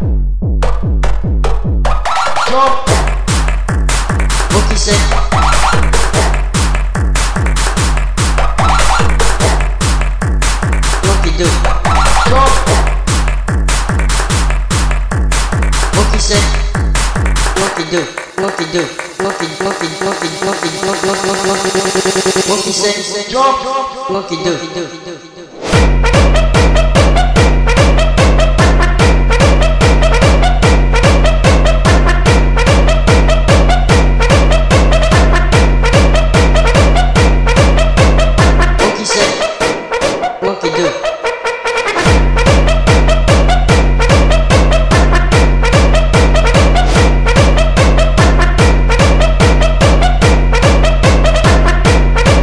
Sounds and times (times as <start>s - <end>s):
Pop music: 0.7s - 52.4s.